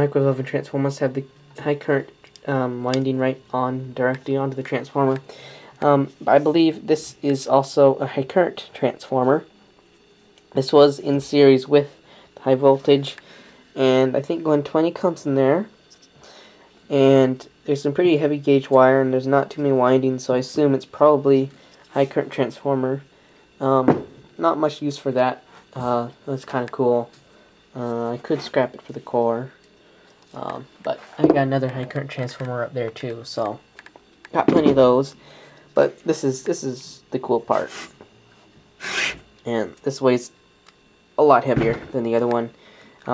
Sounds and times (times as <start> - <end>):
Speech: 0.0 - 9.5, 10.6 - 13.2, 13.8 - 15.8, 16.9 - 23.0, 23.6 - 27.1, 27.8 - 29.6, 30.3 - 33.6, 34.3 - 35.2, 35.8 - 37.9, 39.4 - 40.4, 41.2 - 43.1.